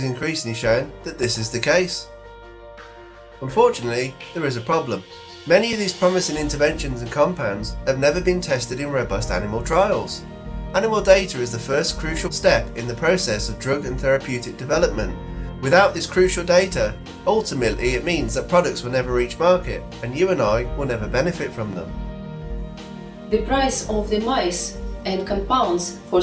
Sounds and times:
Speech: 0.0s - 2.1s, 3.4s - 10.2s, 10.8s - 21.9s, 23.3s - 26.2s
Music: 0.0s - 26.2s.

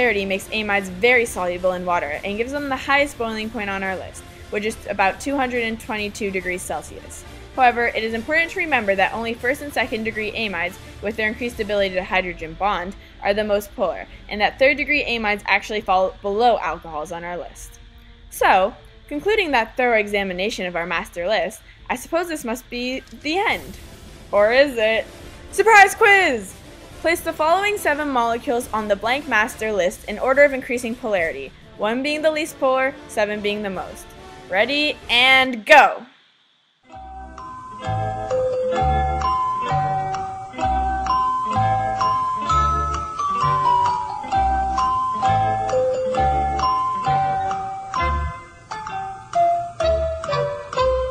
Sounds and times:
Speech: 0.0s - 17.8s, 18.4s - 23.7s, 24.4s - 36.1s
Music: 0.0s - 36.3s, 36.9s - 51.1s.

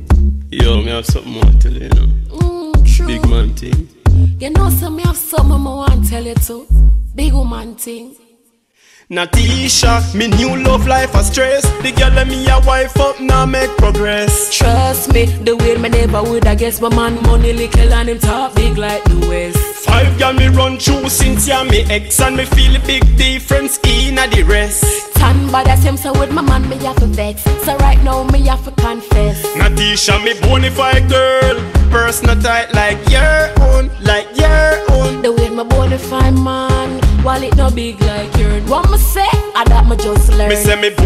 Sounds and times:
Funk: 0.0s - 6.6s, 9.4s - 41.0s.

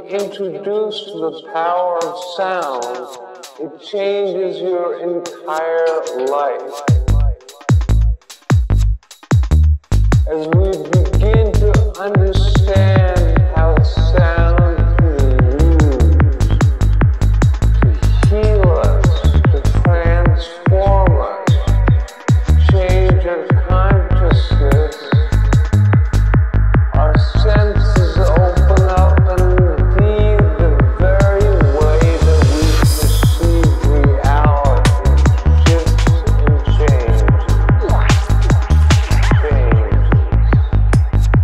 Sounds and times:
Speech: 0.0s - 7.6s, 10.3s - 16.5s, 17.8s - 25.4s, 27.0s - 40.5s
Music: 0.0s - 41.4s.

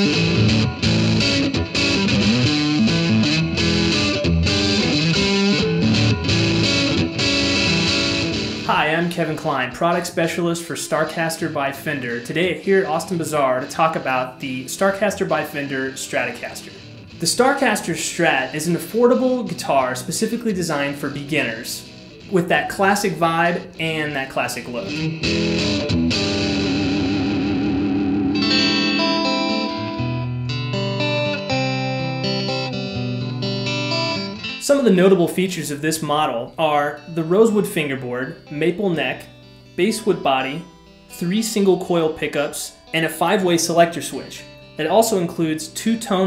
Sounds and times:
Electric guitar: 0.0s - 10.1s, 11.7s - 35.6s
Speech: 8.7s - 25.0s, 34.6s - 46.2s.

